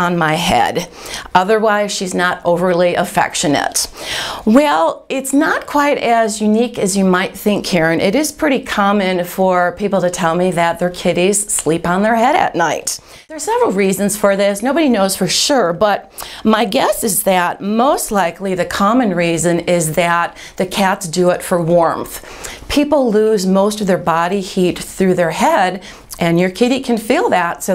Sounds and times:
Speech: 0.0s - 27.7s.

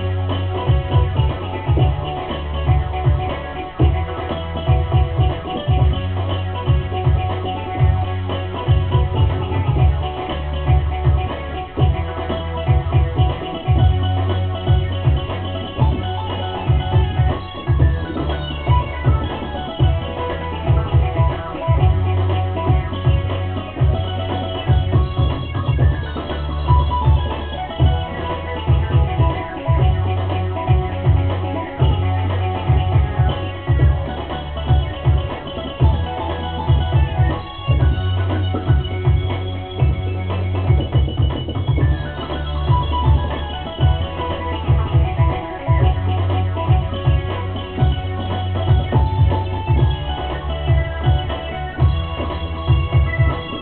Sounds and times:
Music: 0.0s - 53.6s.

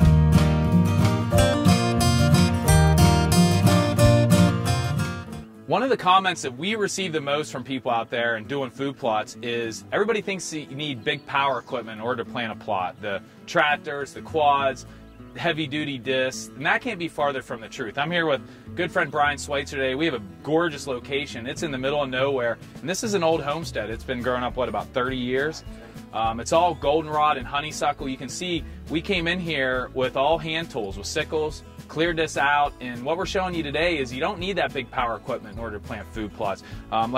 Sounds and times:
Music: 0.0s - 37.1s
Speech: 5.7s - 37.1s.

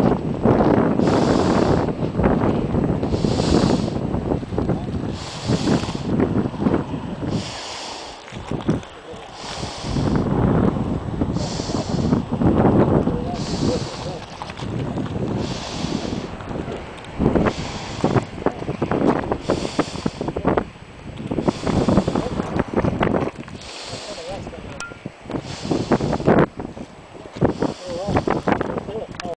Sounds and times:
Speech: 13.1s - 14.2s, 24.0s - 24.8s, 27.8s - 28.2s, 28.8s - 29.3s.

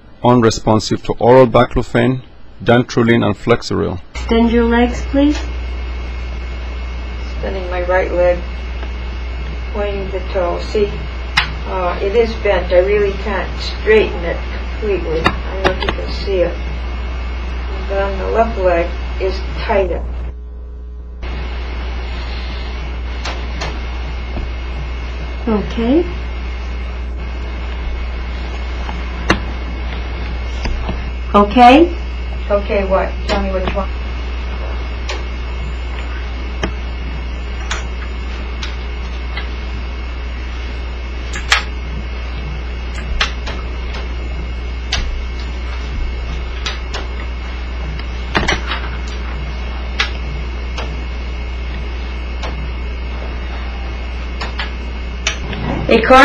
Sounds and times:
Speech: 0.2s - 5.5s, 11.6s - 16.6s, 25.4s - 26.2s, 31.3s - 33.9s, 55.9s - 56.2s.

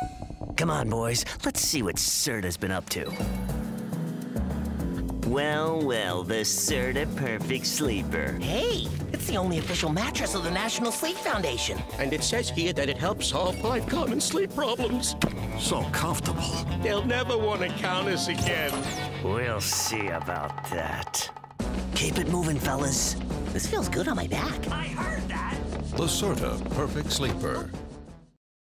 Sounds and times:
Music: 0.0s - 28.4s
Speech: 0.6s - 3.1s, 5.3s - 21.3s, 22.0s - 27.7s.

